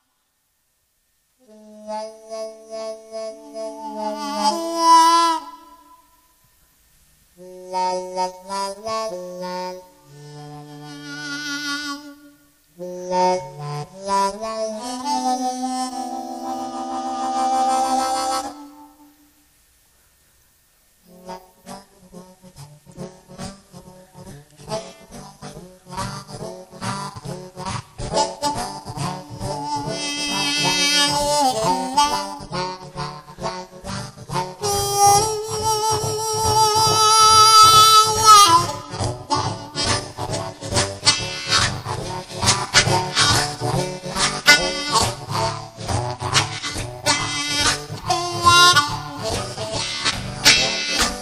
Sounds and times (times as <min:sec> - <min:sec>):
Harmonica: 0:01.4 - 0:06.2, 0:07.4 - 0:19.2, 0:21.0 - 0:51.2.